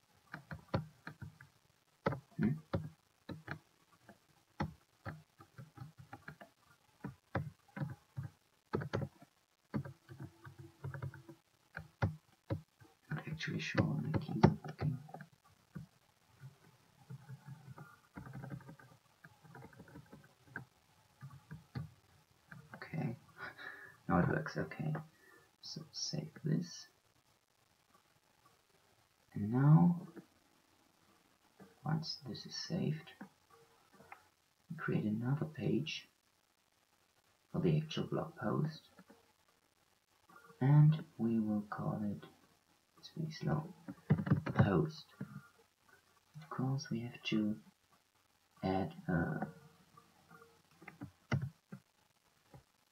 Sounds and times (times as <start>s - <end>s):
Inside, small room: 0.0s - 52.9s
Speech: 2.4s - 2.6s, 13.1s - 15.1s, 22.8s - 27.0s, 29.4s - 30.2s, 31.8s - 33.2s, 34.7s - 36.1s, 37.5s - 38.9s, 40.6s - 42.3s, 43.0s - 43.8s, 44.5s - 45.2s, 46.4s - 47.7s, 48.6s - 49.5s.